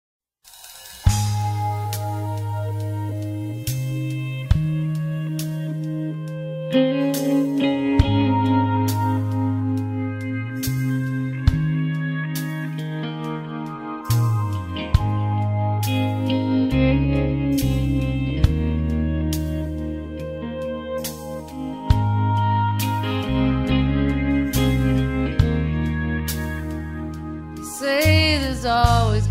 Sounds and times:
Music: 0.5 - 29.3.

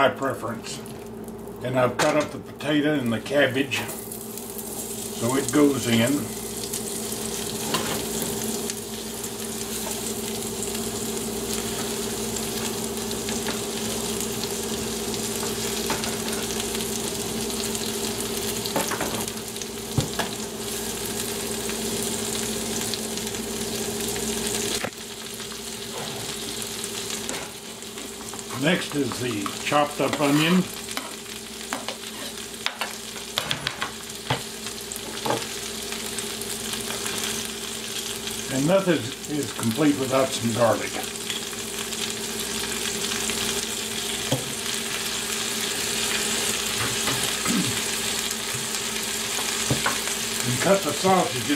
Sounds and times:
Speech: 0.0 - 0.8, 1.6 - 3.9, 5.2 - 6.3, 28.5 - 30.7, 38.5 - 41.1, 50.4 - 51.5
Frying (food): 0.0 - 51.5.

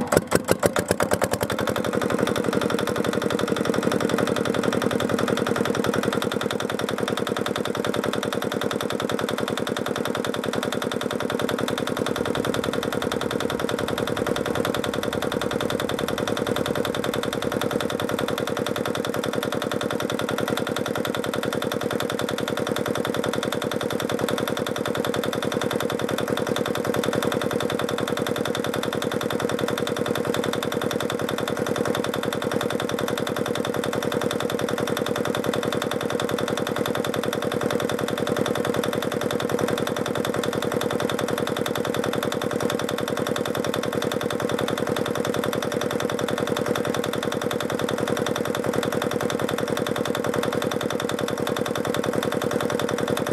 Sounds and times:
Engine: 0.0 - 53.3.

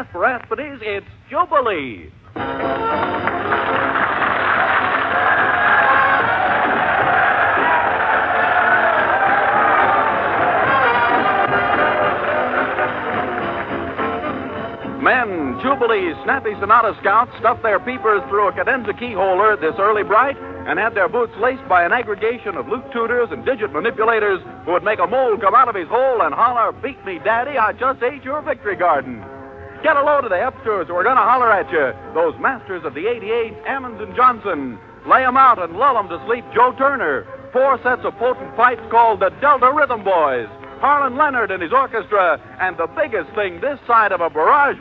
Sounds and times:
Speech: 0.0 - 2.2, 15.0 - 29.2, 29.8 - 44.8
Orchestra: 2.4 - 25.6.

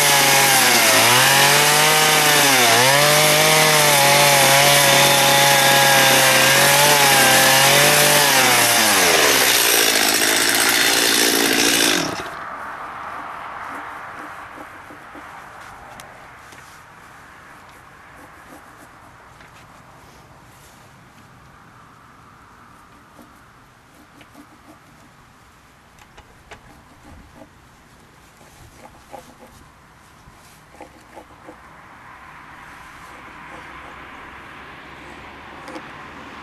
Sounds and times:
Wood: 0.0 - 12.4, 13.6 - 15.8, 23.0 - 25.2, 26.0 - 27.5, 28.4 - 29.6, 30.6 - 31.6, 33.0 - 34.1
Chainsaw: 0.0 - 12.5.

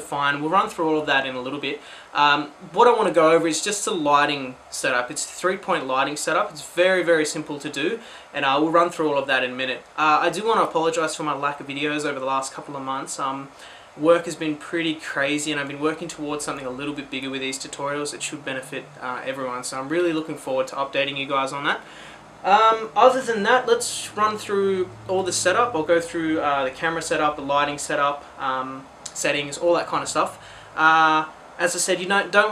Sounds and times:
Speech: 0.0 - 32.5.

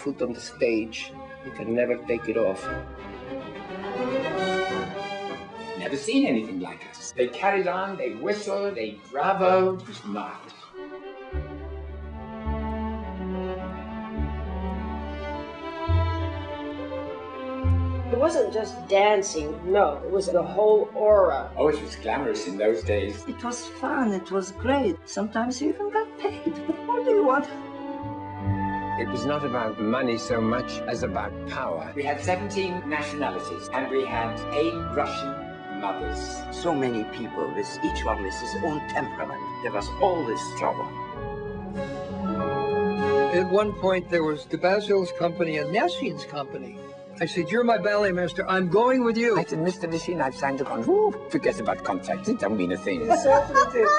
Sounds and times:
Speech: 0.0 - 2.7, 5.8 - 10.7, 18.2 - 23.7, 29.0 - 40.9, 43.3 - 53.9
Cello: 0.0 - 48.5.

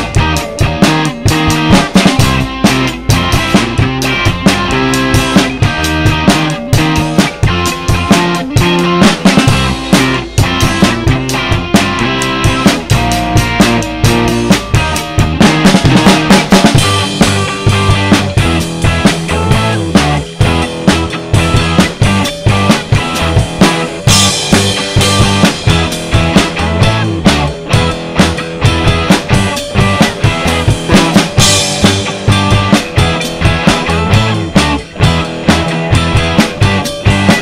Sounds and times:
Bass guitar: 0.0 - 37.4
Electric guitar: 0.0 - 37.4.

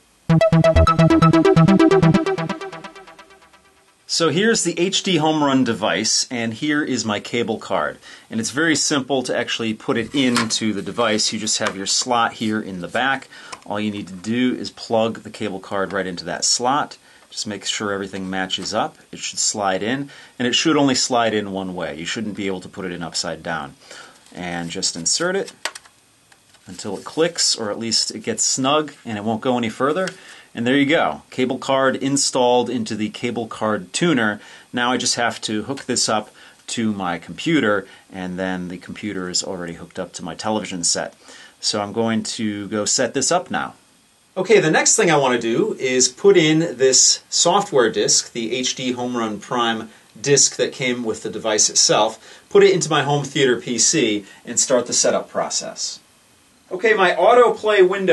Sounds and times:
Speech: 4.1 - 25.6, 26.7 - 43.8, 44.4 - 56.0, 56.7 - 58.1.

